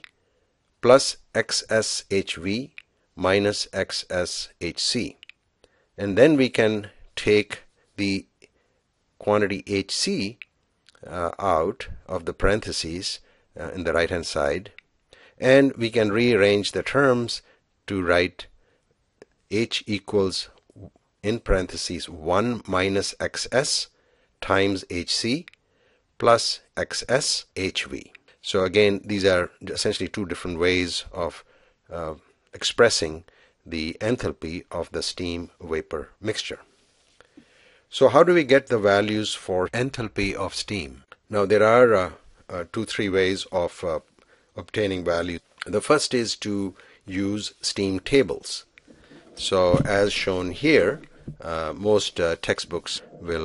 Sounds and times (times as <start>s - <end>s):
Speech: 0.8s - 5.3s, 6.0s - 8.5s, 9.2s - 14.8s, 15.4s - 18.5s, 19.5s - 25.5s, 26.2s - 36.7s, 37.9s - 48.7s, 49.3s - 53.4s.